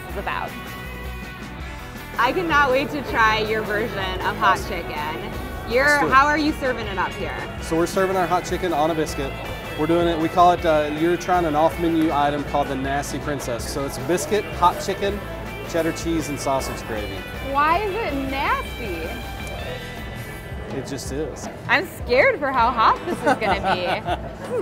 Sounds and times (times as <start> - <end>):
Music: 0.0 - 24.6.